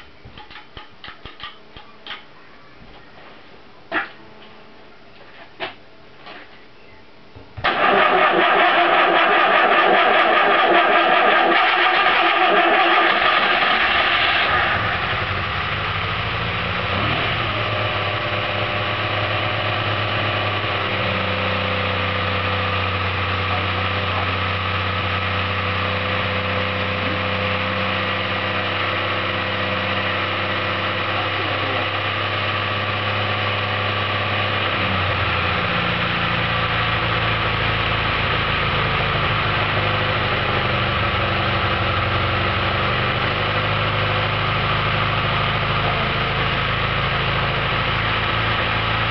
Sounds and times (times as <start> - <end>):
Engine: 7.6 - 49.1.